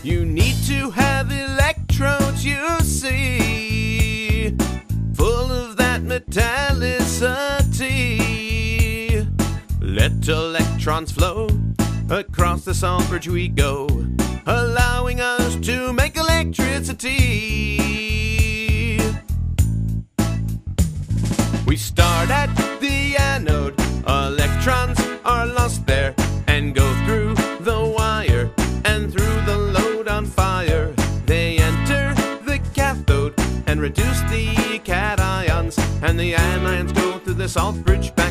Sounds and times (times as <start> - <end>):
Background music: 0.0 - 19.4, 20.2 - 38.3.